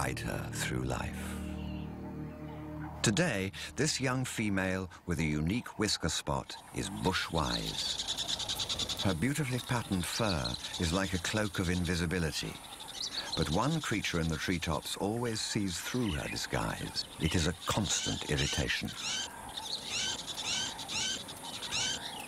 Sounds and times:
Speech: 0:00.0 - 0:01.4, 0:03.0 - 0:07.9, 0:09.0 - 0:12.6, 0:13.3 - 0:19.0
Bird: 0:05.2 - 0:22.2.

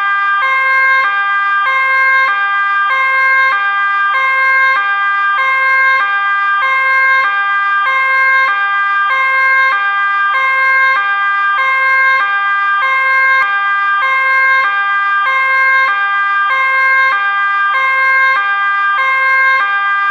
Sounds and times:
Police car (siren): 0:00.0 - 0:20.1.

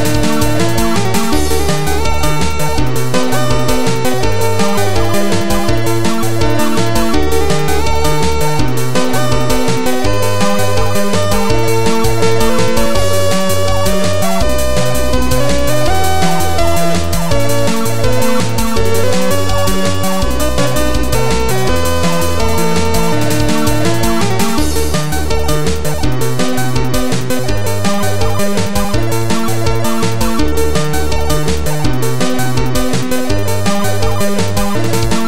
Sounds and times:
Music: 0:00.0 - 0:35.2.

